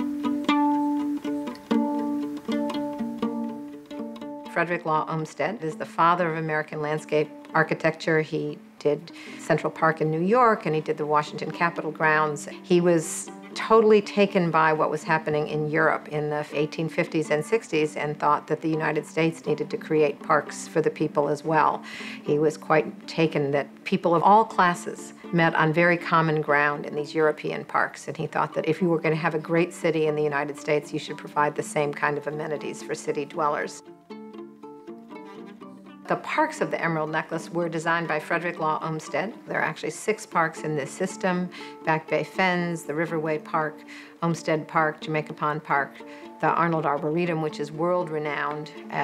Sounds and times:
Music: 0.0 - 49.0
Speech: 4.5 - 33.8, 36.1 - 49.0.

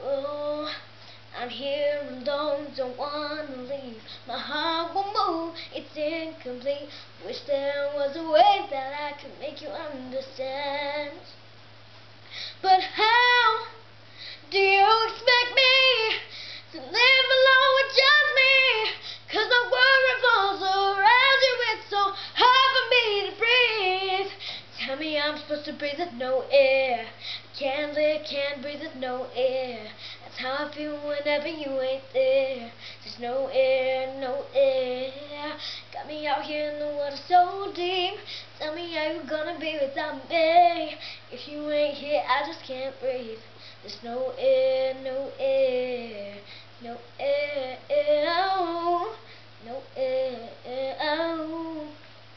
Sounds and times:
Female singing: 0.0 - 11.4, 12.6 - 13.8, 14.5 - 52.0.

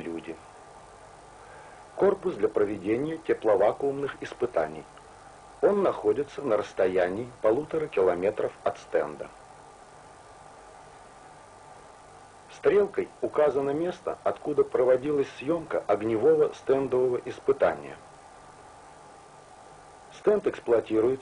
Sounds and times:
Speech: 0.0 - 0.4, 2.0 - 5.0, 5.6 - 9.4, 12.5 - 18.0, 20.1 - 21.2.

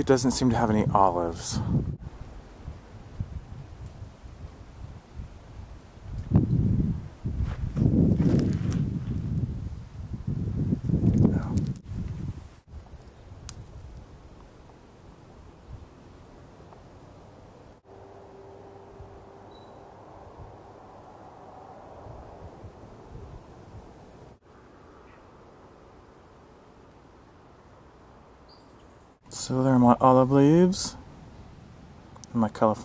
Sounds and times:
Rustling leaves: 2.0 - 32.8.

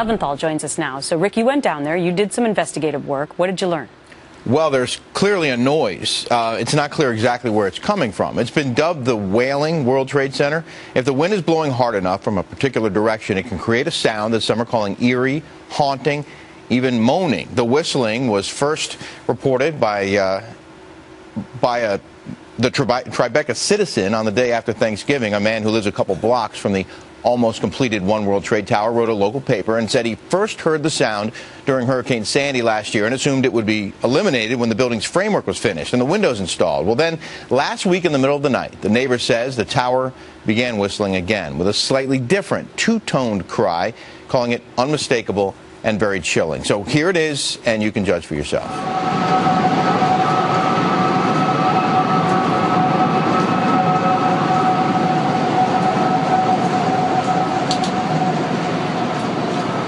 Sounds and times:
Speech: 4.5 - 20.6, 21.4 - 22.0, 22.6 - 48.7.

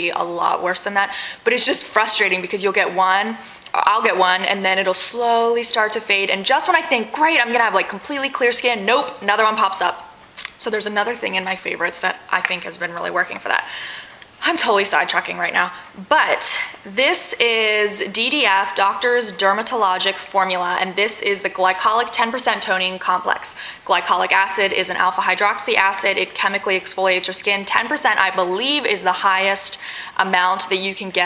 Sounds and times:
Speech: 0.0 - 13.7, 14.4 - 31.2.

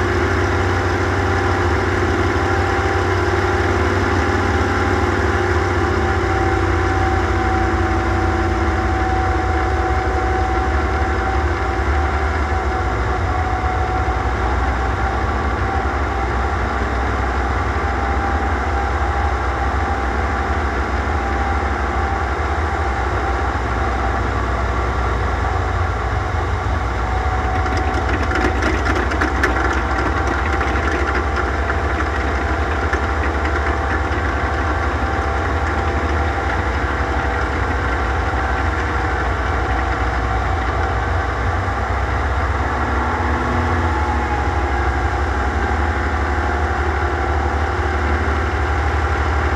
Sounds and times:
Aircraft: 0.0 - 49.5
Outside, rural or natural: 0.0 - 49.5.

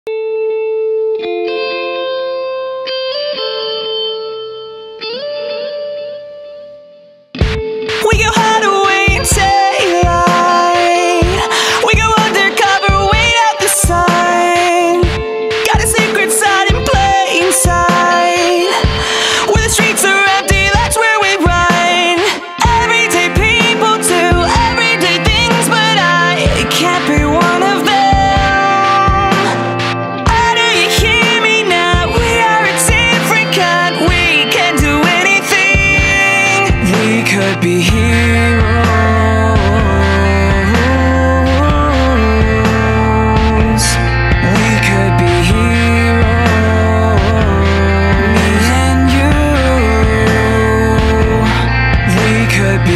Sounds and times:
Electric guitar: 0.1 - 52.9
Singing: 8.0 - 52.9.

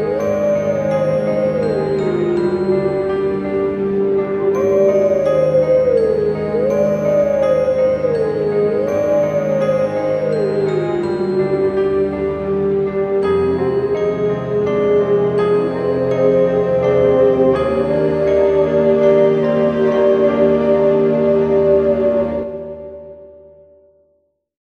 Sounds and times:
Music: 0.0 - 24.5.

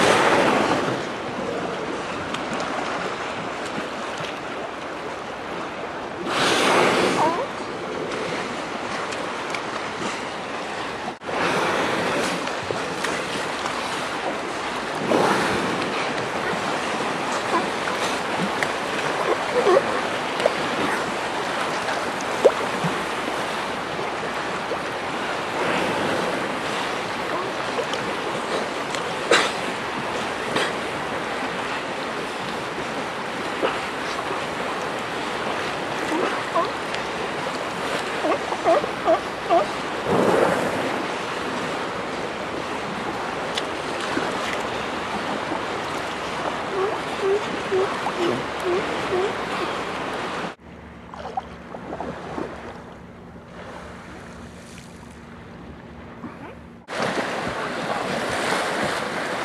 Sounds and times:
Boat, Water vehicle: 0.0 - 59.4.

